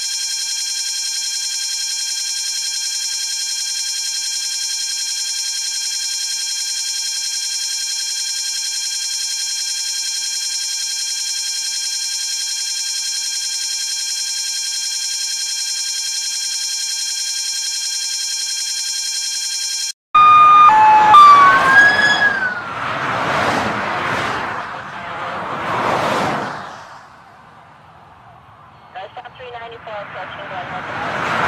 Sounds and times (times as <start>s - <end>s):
Buzzer: 0.0s - 21.4s.